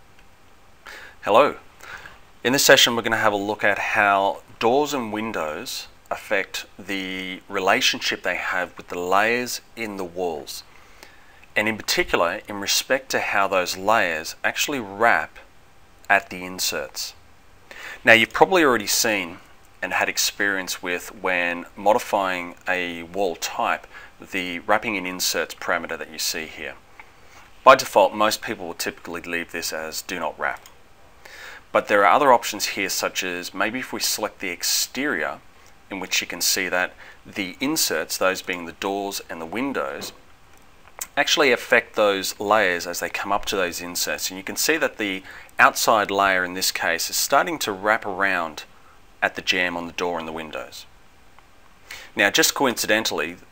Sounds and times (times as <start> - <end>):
Speech: 1.2 - 1.6, 2.4 - 10.7, 11.6 - 15.5, 16.1 - 17.2, 18.0 - 26.8, 27.6 - 30.7, 31.7 - 40.2, 41.0 - 50.9, 52.2 - 53.5.